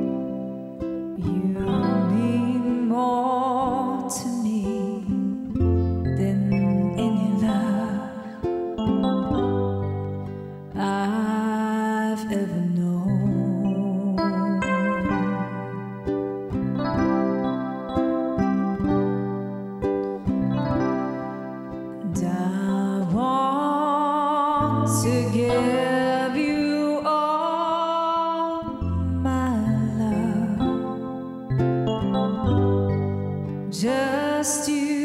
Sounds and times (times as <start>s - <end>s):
Wedding music: 14.6s - 22.0s.